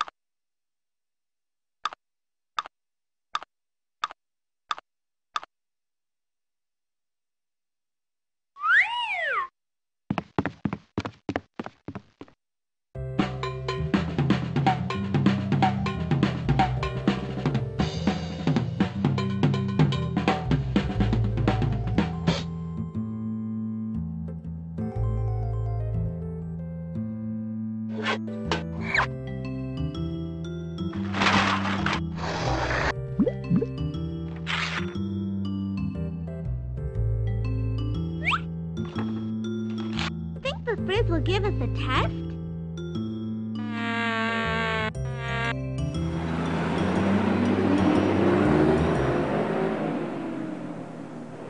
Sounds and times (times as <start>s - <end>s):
Drum kit: 13.2s - 22.5s.